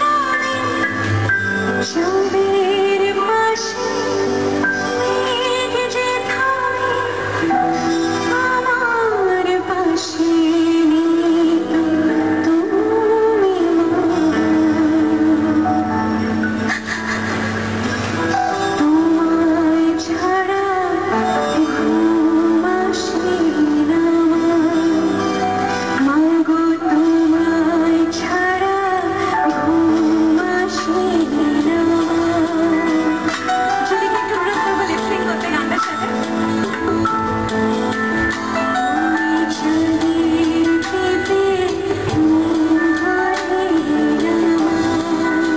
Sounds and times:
Music: 0:00.0 - 0:45.5
Female singing: 0:01.8 - 0:15.6, 0:18.8 - 0:25.2, 0:26.0 - 0:36.3, 0:39.0 - 0:45.5.

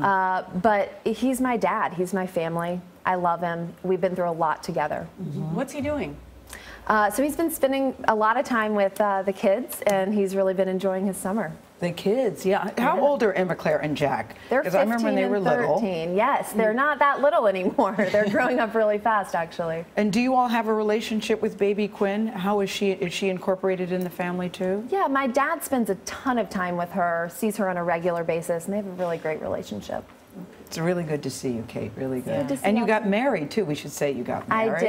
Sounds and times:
Female speech, woman speaking: 0:00.0 - 0:06.2, 0:06.9 - 0:30.1, 0:30.8 - 0:34.8.

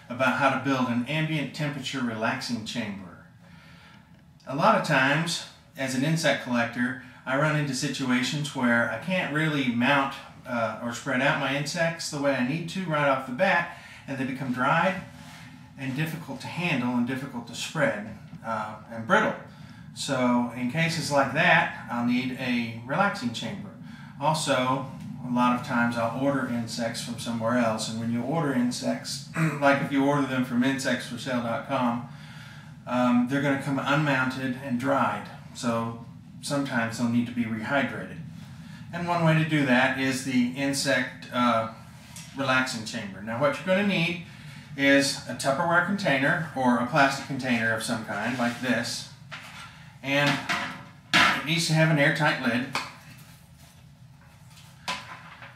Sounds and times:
Speech: 0:00.0 - 0:03.4, 0:04.4 - 0:32.2, 0:32.8 - 0:38.3, 0:38.9 - 0:49.2, 0:50.0 - 0:52.8.

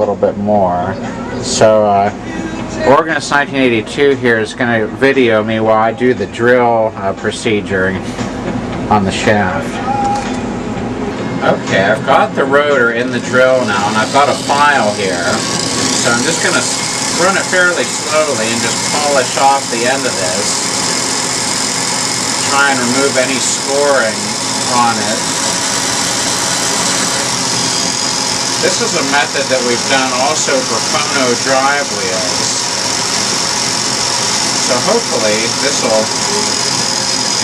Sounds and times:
Speech: 0:00.0 - 0:08.0, 0:08.9 - 0:09.8, 0:16.0 - 0:20.5, 0:22.5 - 0:25.2, 0:28.6 - 0:32.6, 0:34.7 - 0:36.4.

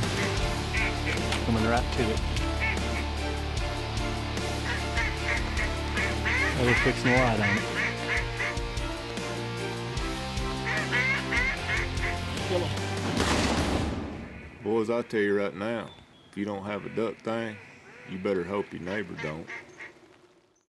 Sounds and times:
Music: 0:00.0 - 0:14.0
Speech: 0:01.5 - 0:02.2, 0:14.6 - 0:19.5
Duck: 0:04.7 - 0:08.5, 0:10.6 - 0:12.2, 0:16.7 - 0:20.0
Bird: 0:14.1 - 0:20.7.

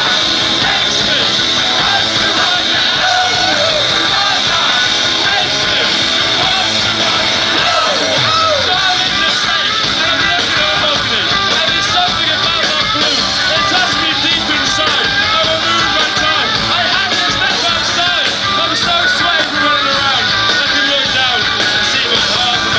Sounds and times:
Music: 0:00.0 - 0:22.7.

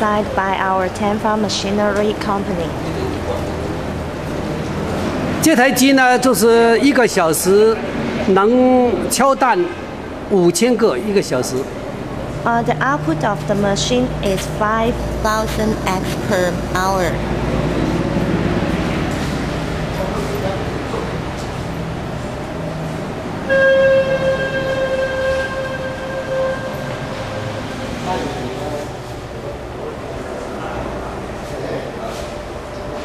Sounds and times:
Speech: 0:12.5 - 0:17.2.

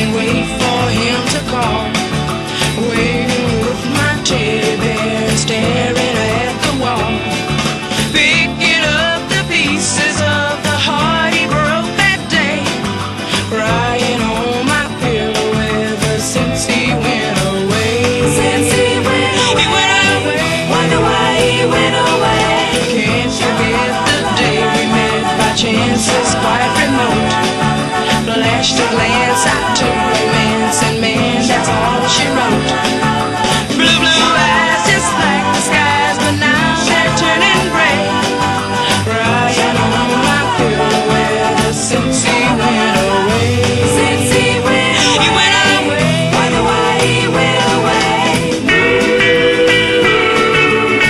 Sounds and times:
Music: 0:00.0 - 0:51.0.

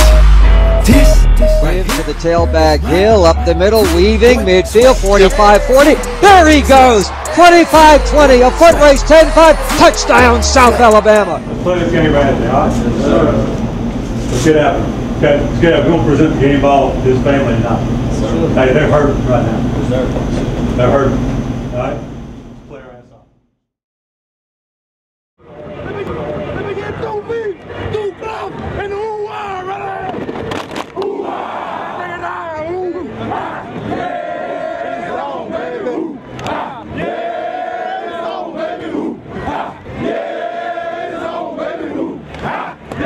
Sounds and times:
Crowd: 0:03.8 - 0:15.0, 0:25.4 - 0:43.0
Battle cry: 0:31.0 - 0:32.2, 0:33.0 - 0:43.0.

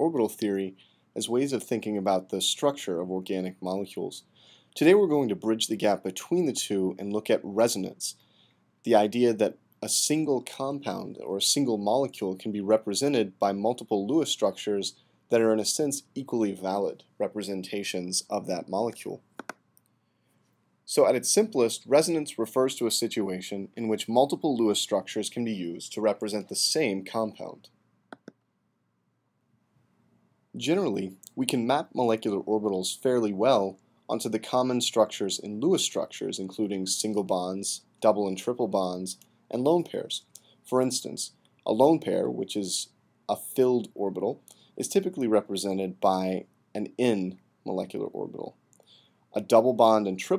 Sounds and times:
Speech: 0:00.0 - 0:08.2, 0:08.9 - 0:19.3, 0:20.9 - 0:27.8, 0:30.6 - 0:48.6, 0:49.4 - 0:50.3.

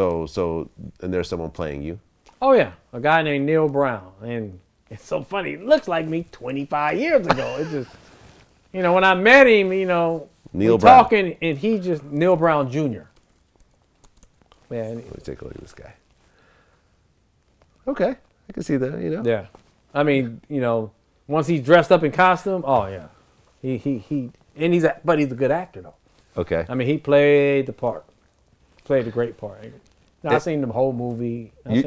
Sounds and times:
Inside, small room: 0:00.0 - 0:31.8
Speech: 0:08.8 - 0:13.1, 0:14.7 - 0:16.0, 0:28.9 - 0:31.8.

